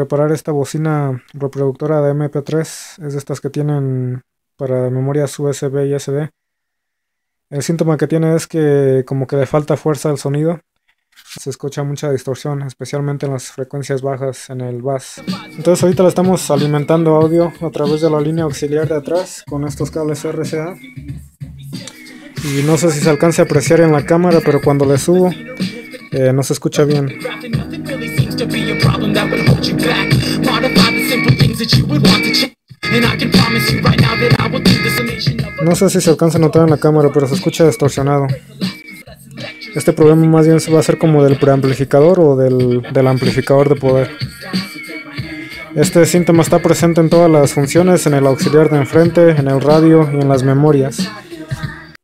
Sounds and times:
Speech: 0.0s - 6.3s, 7.5s - 10.6s, 11.3s - 20.8s, 22.4s - 25.4s, 26.2s - 27.2s, 35.6s - 38.4s, 39.8s - 44.1s, 45.8s - 51.1s
Inside, small room: 0.0s - 52.0s
Music: 15.2s - 52.0s.

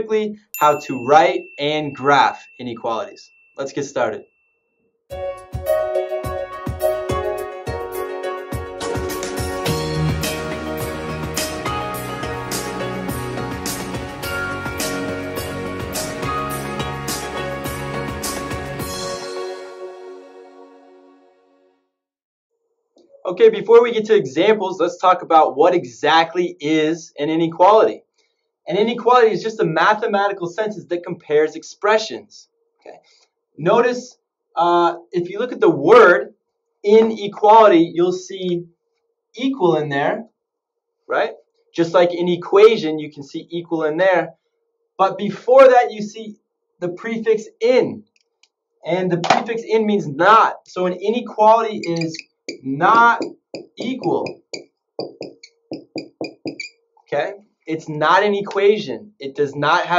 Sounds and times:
Speech: 0.0s - 4.3s, 23.2s - 28.0s, 28.7s - 33.0s, 33.6s - 36.3s, 36.9s - 38.6s, 39.4s - 40.3s, 41.1s - 44.3s, 45.0s - 48.0s, 48.9s - 54.3s, 57.1s - 59.9s.

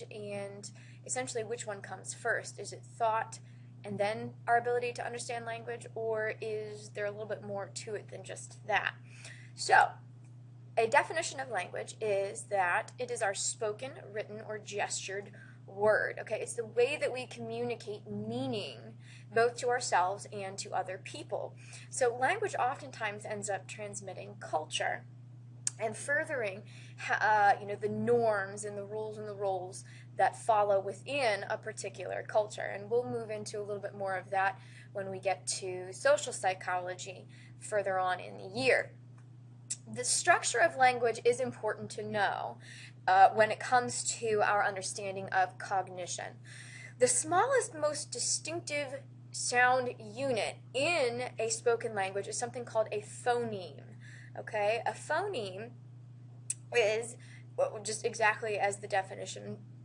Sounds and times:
Speech: 0.0s - 10.0s, 10.8s - 25.1s, 25.7s - 38.9s, 39.7s - 55.7s, 56.5s - 59.6s
Inside, small room: 0.0s - 59.8s.

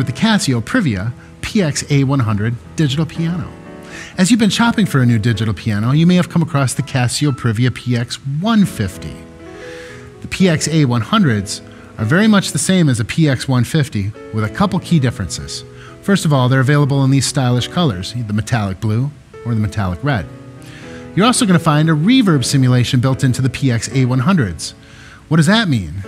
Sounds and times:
Speech: 0.0s - 9.3s, 10.2s - 20.3s, 21.2s - 26.0s
Music: 0.0s - 26.0s.

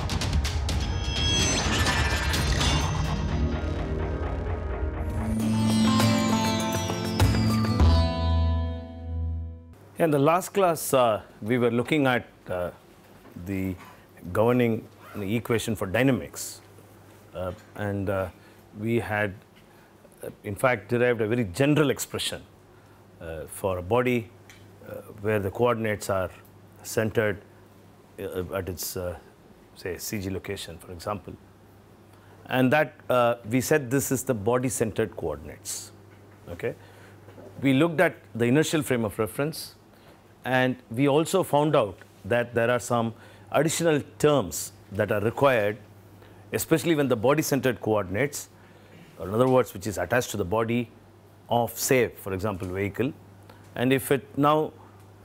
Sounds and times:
Speech: 10.0s - 12.8s, 13.4s - 16.7s, 17.3s - 19.4s, 20.2s - 22.5s, 23.2s - 27.5s, 28.2s - 31.4s, 32.5s - 36.8s, 37.6s - 39.8s, 40.4s - 45.9s, 46.5s - 48.6s, 49.2s - 53.2s, 53.8s - 54.8s.

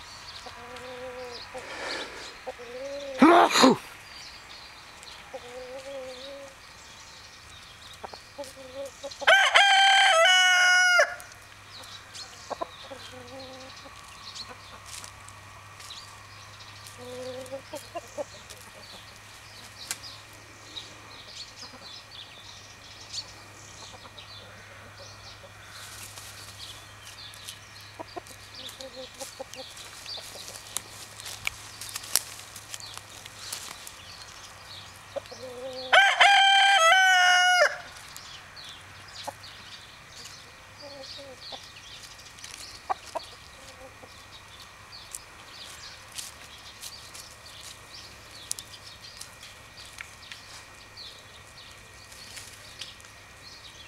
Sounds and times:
Crowing, cock-a-doodle-doo: 9.2s - 11.3s, 35.8s - 37.9s
Cluck: 17.2s - 19.0s.

